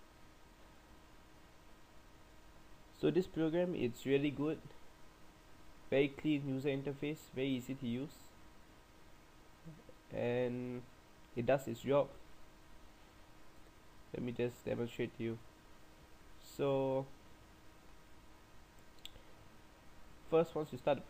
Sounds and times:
Speech: 3.0s - 4.8s, 5.9s - 8.3s, 9.7s - 12.2s, 14.1s - 15.4s, 16.4s - 17.2s, 20.3s - 21.0s.

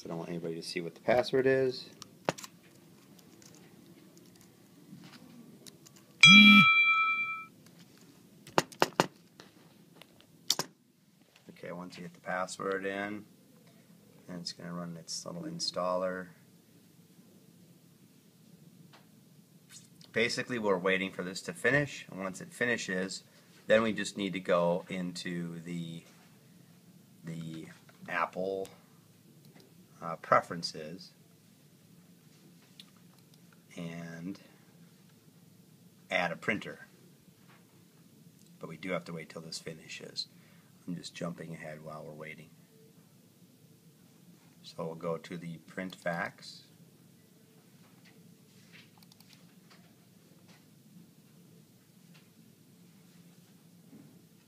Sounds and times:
Speech: 0.0s - 2.0s, 11.5s - 13.3s, 14.2s - 16.4s, 20.1s - 26.1s, 27.2s - 28.8s, 30.0s - 31.2s, 33.7s - 34.5s, 36.1s - 36.9s, 38.6s - 42.6s, 44.6s - 46.8s.

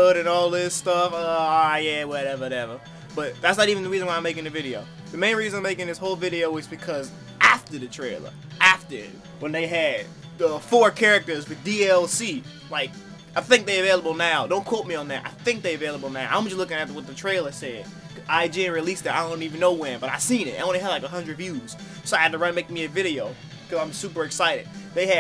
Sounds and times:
Music: 0.0s - 25.2s
Speech: 0.0s - 25.2s.

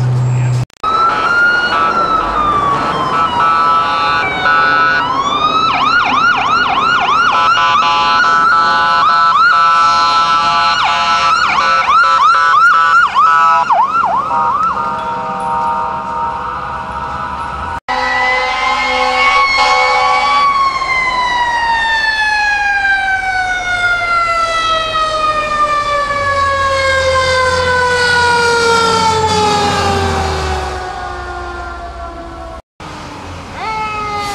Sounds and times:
Fire engine, fire truck (siren): 0.4s - 32.6s, 33.6s - 34.3s.

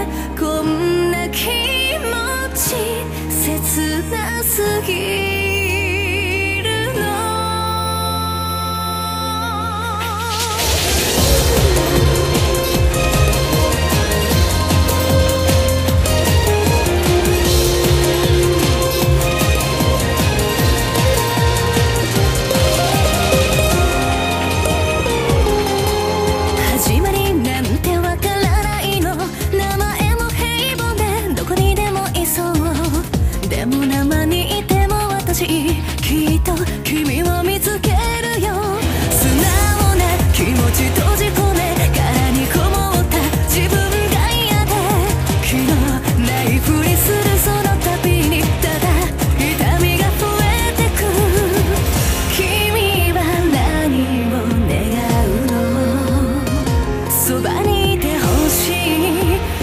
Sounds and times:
Background music: 0.0s - 59.6s.

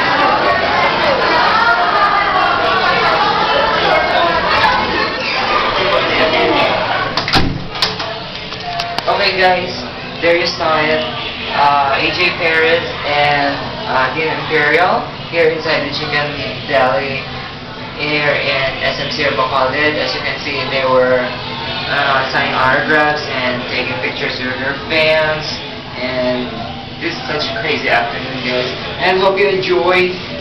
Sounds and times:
Speech: 8.8s - 30.4s.

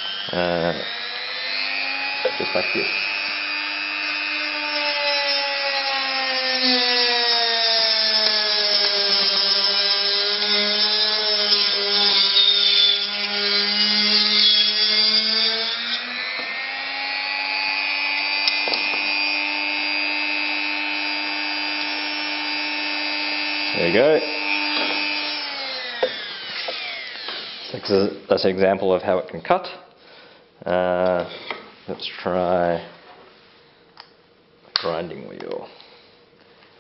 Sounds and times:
Drill: 0.0s - 28.2s
Speech: 0.3s - 0.8s, 2.3s - 2.9s, 23.8s - 24.3s, 27.8s - 29.9s, 30.6s - 31.3s, 31.9s - 33.0s, 34.8s - 35.7s.

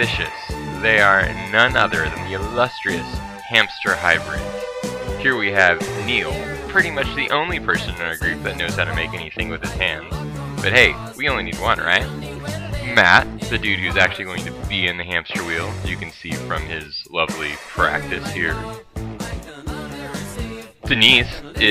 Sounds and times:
Speech: 0.0s - 4.4s, 5.2s - 12.1s, 12.8s - 18.6s, 20.9s - 21.7s
Music: 0.0s - 21.7s.

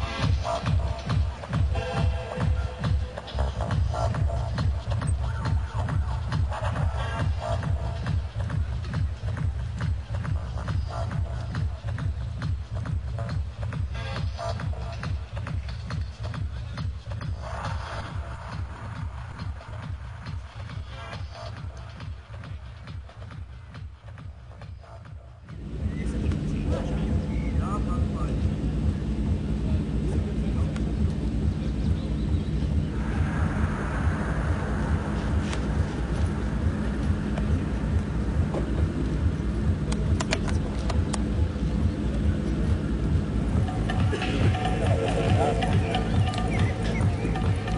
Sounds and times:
Music: 0.0s - 30.4s, 31.0s - 47.7s.

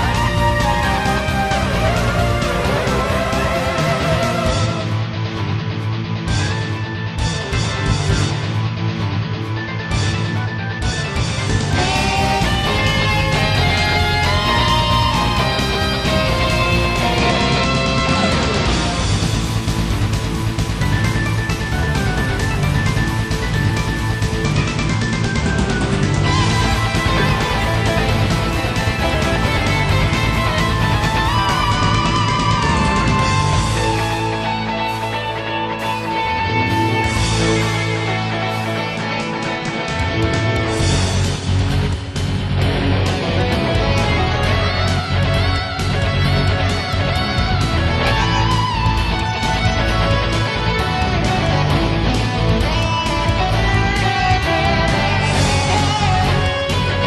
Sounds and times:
Music: 0.0s - 57.0s.

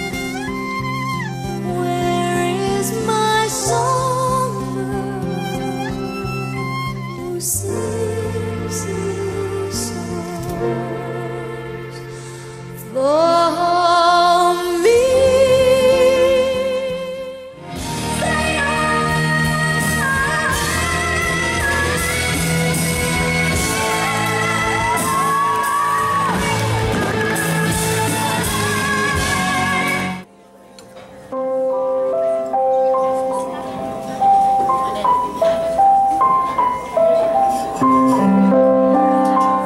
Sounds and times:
Pop music: 17.9s - 30.3s.

